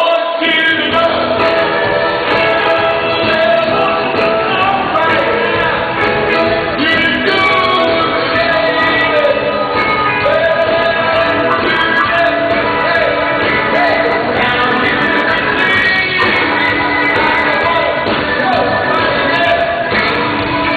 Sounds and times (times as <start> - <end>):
Music: 0.0 - 20.7.